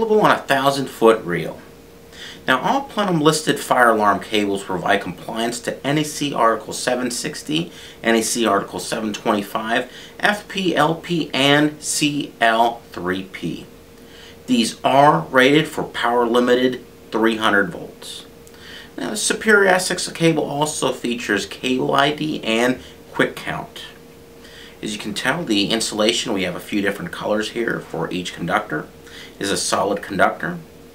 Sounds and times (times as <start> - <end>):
Speech: 0.0 - 1.7, 2.4 - 13.7, 14.4 - 18.3, 19.0 - 24.0, 24.8 - 30.7.